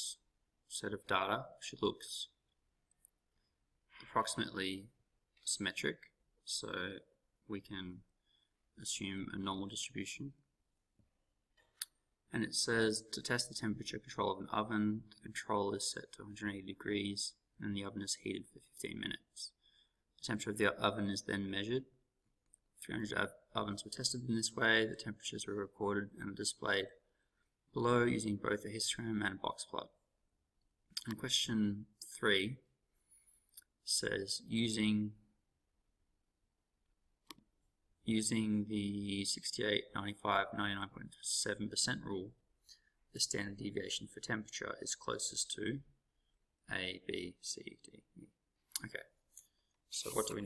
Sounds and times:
Speech: 0.0s - 2.4s, 4.0s - 8.1s, 8.8s - 10.5s, 12.3s - 19.6s, 20.2s - 22.0s, 22.8s - 27.0s, 27.7s - 30.1s, 30.9s - 32.7s, 33.8s - 35.3s, 38.0s - 42.4s, 43.1s - 46.0s, 46.6s - 49.2s, 49.9s - 50.4s.

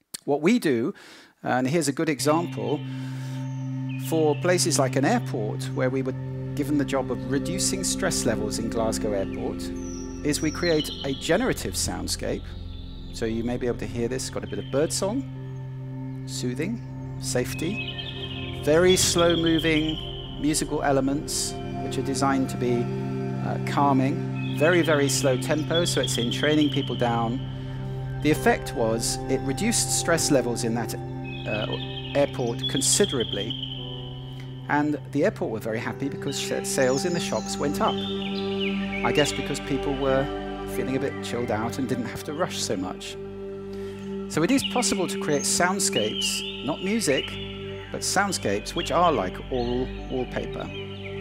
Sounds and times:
Narration, monologue: 0.0s - 50.9s
Male speech, man speaking: 0.2s - 2.8s, 4.1s - 9.7s, 10.3s - 12.5s, 13.2s - 15.2s, 16.3s - 17.8s, 18.6s - 27.4s, 28.2s - 33.6s, 34.7s - 38.0s, 39.0s - 43.2s, 44.3s - 47.4s, 48.0s - 50.7s
Music: 1.5s - 51.2s.

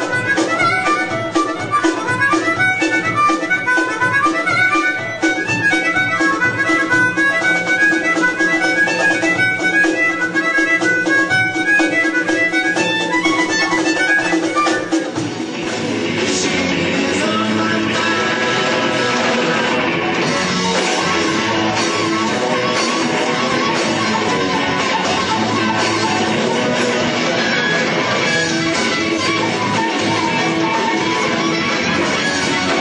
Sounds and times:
Wind instrument, woodwind instrument: 0.0s - 15.3s, 18.0s - 32.8s
Harmonica: 0.0s - 32.8s.

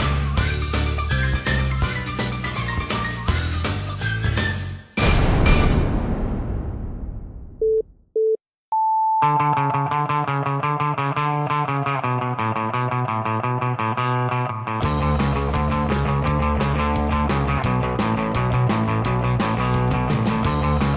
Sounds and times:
Music: 0.0s - 6.2s, 9.2s - 20.9s.

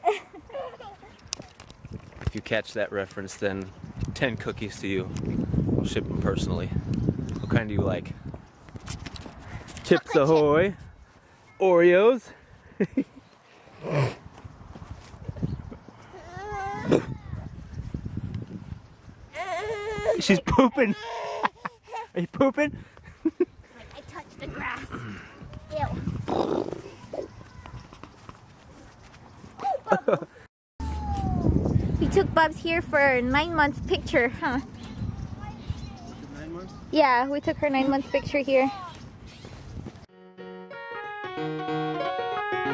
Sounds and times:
Outside, rural or natural: 0.0s - 42.7s
Child speech, kid speaking: 9.8s - 10.7s, 16.5s - 17.5s, 23.8s - 26.2s, 26.8s - 28.0s, 30.9s - 39.0s.

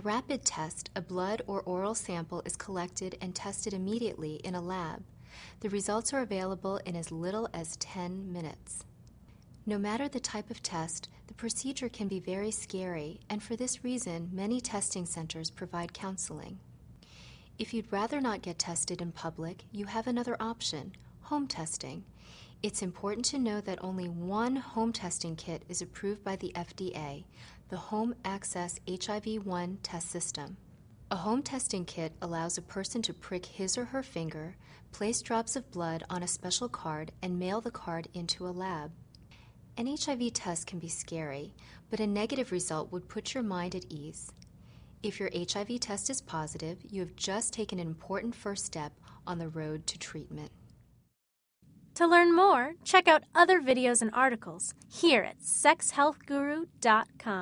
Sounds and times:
Speech: 0.0s - 5.0s, 5.6s - 8.9s, 9.6s - 16.6s, 17.6s - 39.0s, 39.8s - 44.4s, 45.0s - 50.6s, 52.0s - 57.4s.

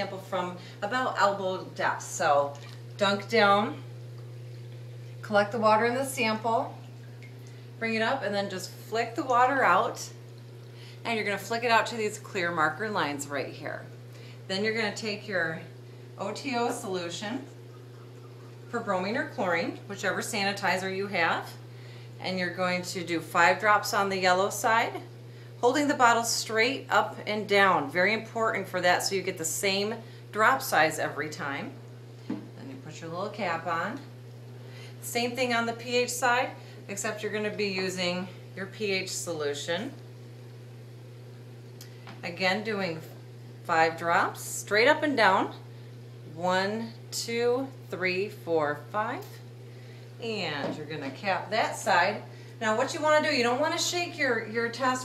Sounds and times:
Speech: 0.0s - 3.9s, 5.2s - 6.8s, 7.8s - 10.2s, 11.1s - 13.9s, 14.5s - 17.5s, 18.7s - 21.6s, 22.2s - 31.8s, 32.6s - 34.1s, 35.0s - 40.0s, 42.2s - 43.1s, 43.7s - 45.6s, 46.3s - 49.4s, 50.2s - 55.0s.

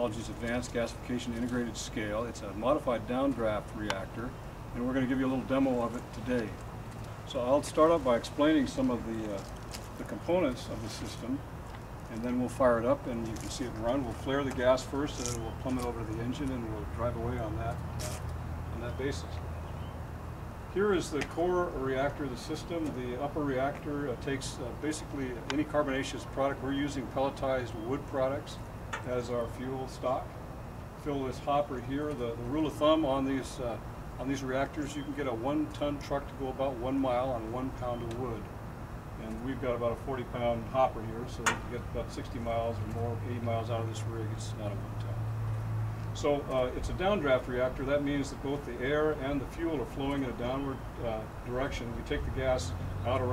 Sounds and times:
Speech: 0.0s - 6.6s, 7.3s - 11.4s, 12.1s - 19.4s, 20.7s - 30.3s, 31.0s - 38.5s, 39.2s - 45.2s, 46.2s - 53.3s.

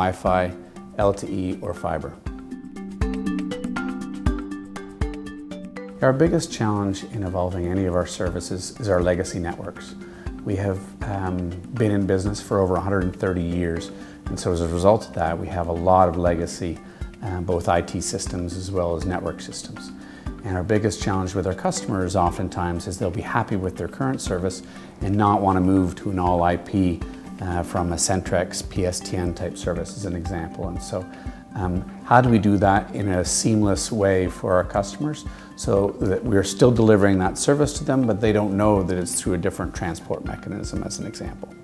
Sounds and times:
Speech: 0.0s - 2.2s, 6.0s - 41.5s
Music: 0.0s - 41.6s.

